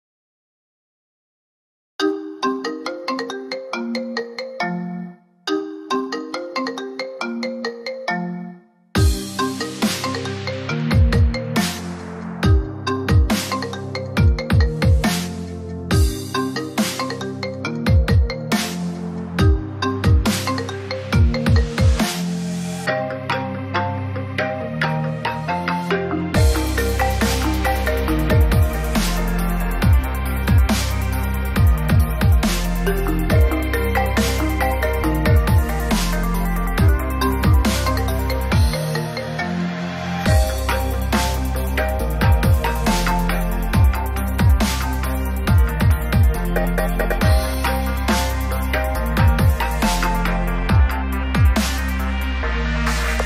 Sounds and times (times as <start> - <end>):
Ringtone: 2.0 - 53.2
Dubstep: 9.0 - 53.2.